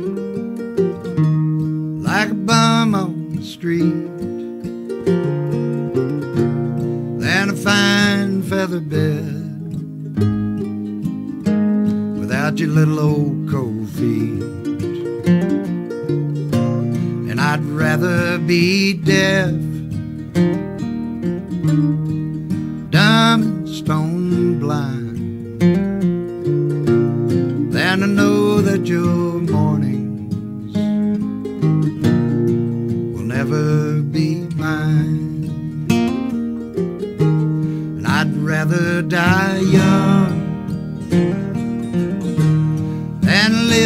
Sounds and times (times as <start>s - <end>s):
Music: 0.0s - 43.8s.